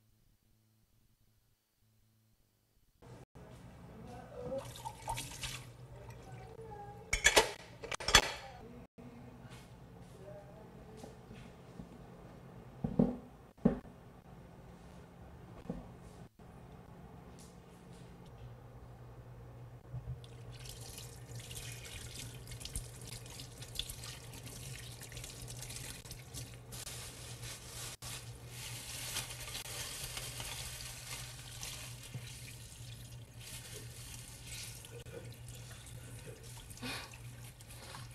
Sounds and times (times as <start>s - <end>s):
Water: 4.4s - 6.7s, 20.2s - 26.6s, 30.3s - 38.1s
Water tap, faucet: 4.6s - 5.8s, 20.3s - 26.7s, 29.2s - 38.1s
Sink (filling or washing): 4.6s - 6.6s, 20.3s - 26.8s, 28.6s - 38.1s.